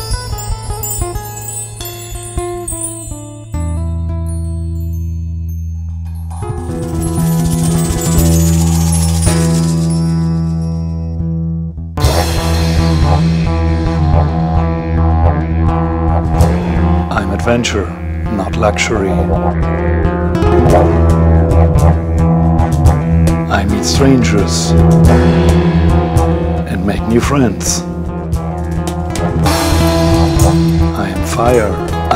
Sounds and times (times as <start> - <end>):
Music: 0.0 - 32.1
Speech: 17.1 - 19.4, 23.5 - 24.8, 26.7 - 27.9, 31.0 - 32.1.